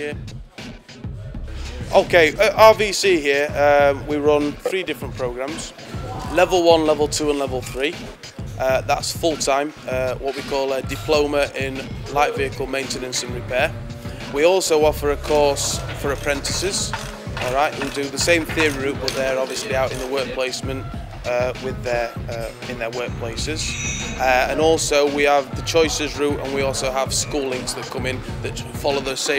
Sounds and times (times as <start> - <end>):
Speech: 0.0 - 0.2, 1.7 - 8.0, 8.6 - 13.7, 14.3 - 29.3
Music: 0.0 - 29.3.